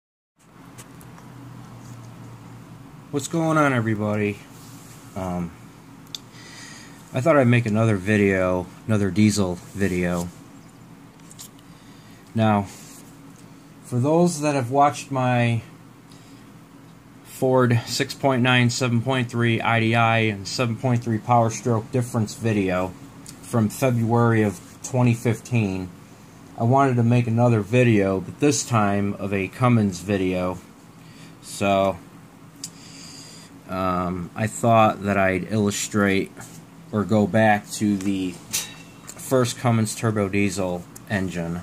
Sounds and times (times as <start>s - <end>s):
Speech: 3.1s - 4.5s, 5.2s - 5.6s, 7.1s - 10.4s, 12.3s - 12.8s, 13.8s - 15.7s, 17.3s - 26.0s, 26.6s - 30.7s, 31.4s - 32.0s, 33.7s - 38.6s, 39.2s - 41.6s.